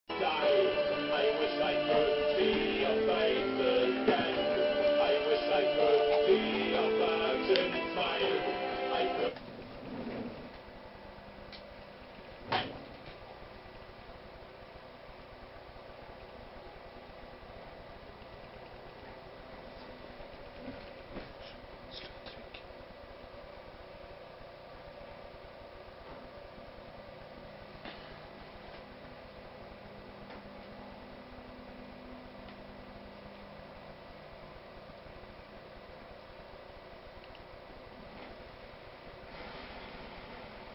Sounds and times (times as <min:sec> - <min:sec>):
Music: 0:00.1 - 0:09.4
Television: 0:00.1 - 0:40.7.